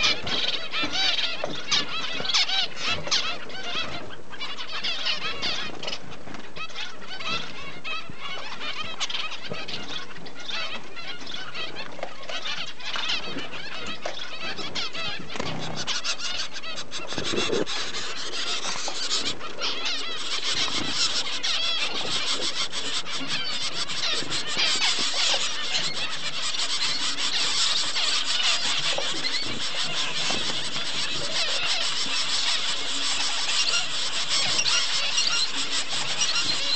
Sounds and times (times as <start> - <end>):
Bird: 0.0 - 36.7.